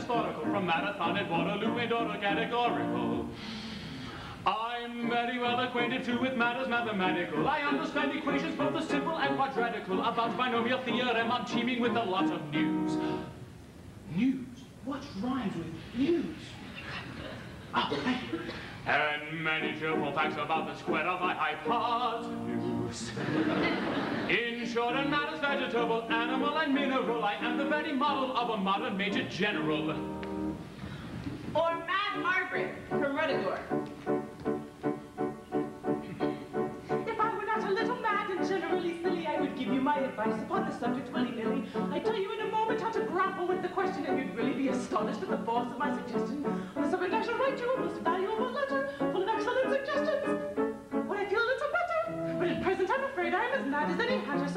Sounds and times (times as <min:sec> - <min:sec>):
Music: 0:00.0 - 0:13.5, 0:18.8 - 0:54.5.